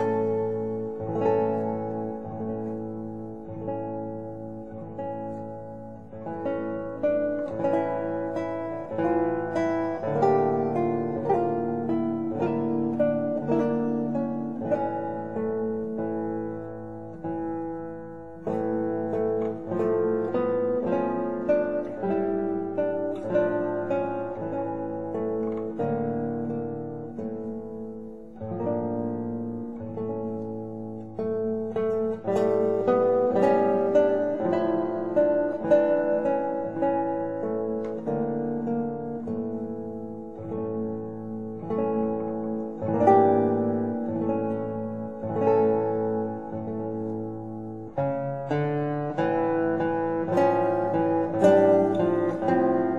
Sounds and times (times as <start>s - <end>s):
Music: 0.0s - 52.9s.